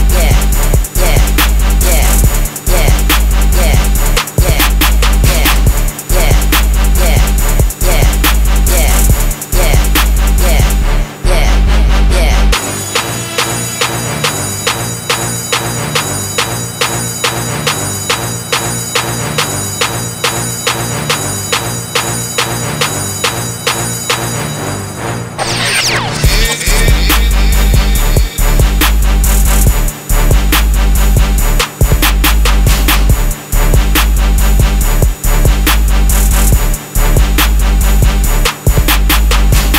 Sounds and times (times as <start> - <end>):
Music: 0.0 - 39.7.